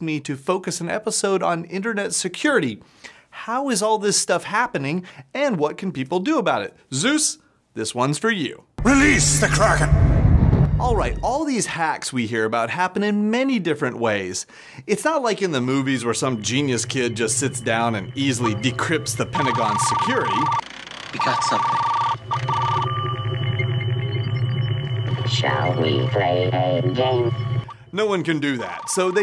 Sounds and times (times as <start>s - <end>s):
Speech: 0.0s - 2.8s, 3.4s - 10.0s, 10.8s - 20.5s, 21.2s - 21.8s, 25.3s - 27.3s, 28.0s - 29.2s
Music: 8.8s - 11.4s, 16.2s - 19.8s, 22.8s - 27.7s.